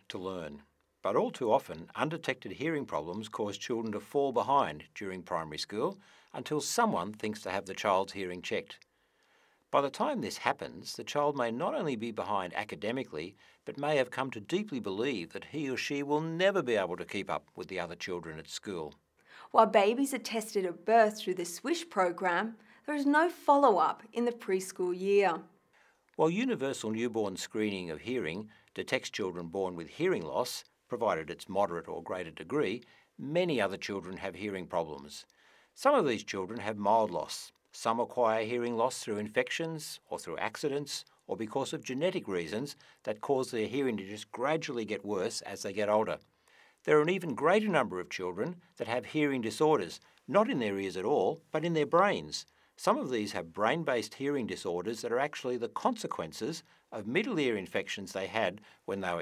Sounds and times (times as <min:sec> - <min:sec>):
Speech: 0:00.0 - 0:08.8, 0:09.7 - 0:25.5, 0:26.2 - 0:46.2, 0:46.8 - 0:59.2.